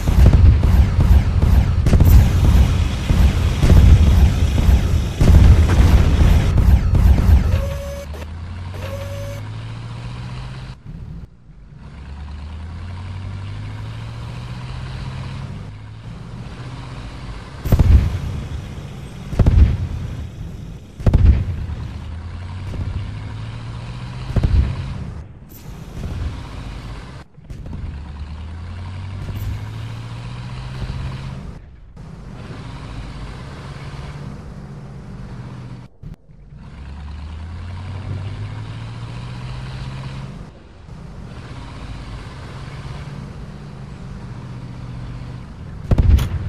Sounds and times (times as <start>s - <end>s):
Outside, rural or natural: 0.0s - 46.4s
Vehicle: 0.0s - 46.4s.